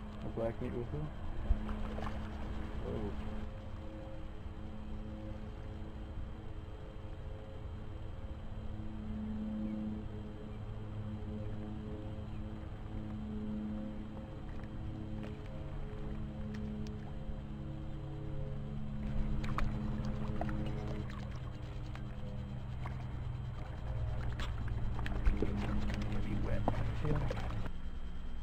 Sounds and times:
Speech: 0.2s - 1.1s, 2.8s - 3.2s, 25.3s - 27.4s.

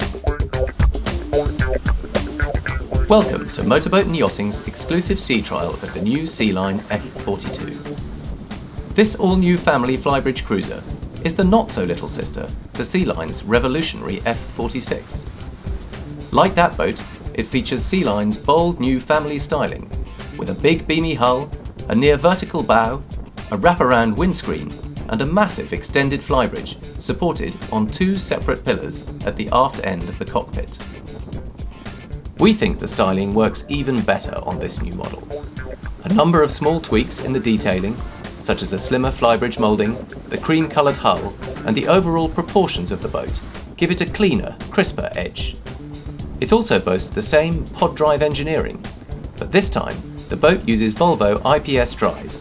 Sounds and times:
Music: 0.0s - 52.4s
Speech: 3.1s - 7.9s, 9.0s - 15.3s, 16.4s - 30.8s, 32.4s - 35.4s, 36.0s - 45.6s, 46.4s - 52.4s.

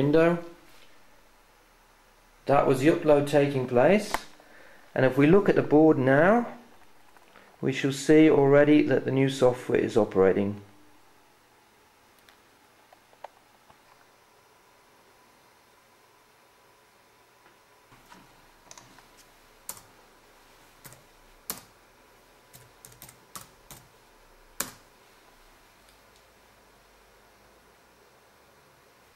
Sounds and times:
Speech: 0.0s - 0.6s, 2.4s - 4.3s, 5.0s - 6.6s, 7.6s - 10.7s.

